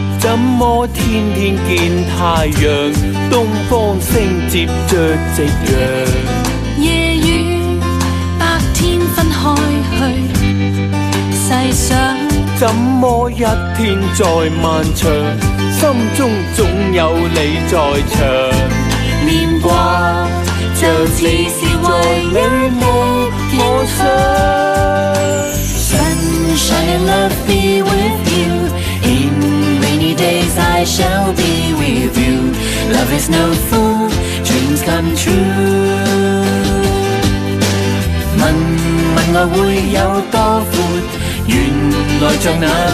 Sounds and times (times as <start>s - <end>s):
Theme music: 14.6s - 42.9s.